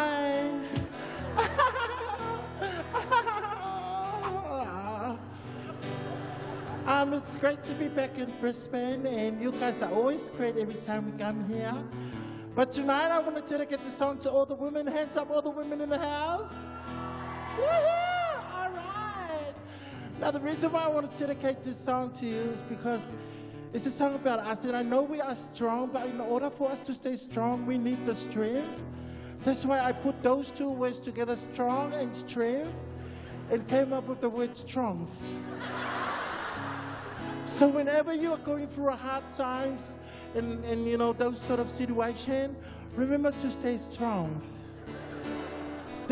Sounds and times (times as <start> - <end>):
Music: 0.0 - 46.1
Speech: 23.8 - 28.7.